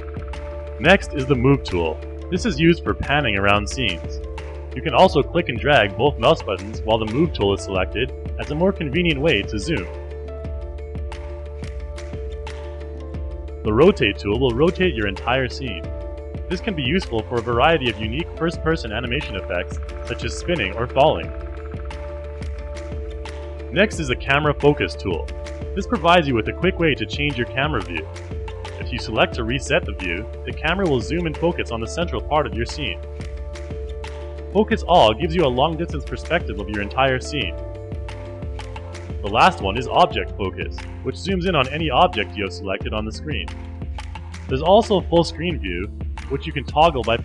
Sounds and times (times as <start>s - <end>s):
Music: 0.0s - 47.2s
Speech: 0.8s - 4.2s, 4.8s - 10.0s, 13.6s - 15.9s, 16.5s - 21.4s, 23.7s - 28.1s, 28.8s - 33.0s, 34.5s - 37.6s, 39.2s - 43.5s, 44.5s - 47.2s.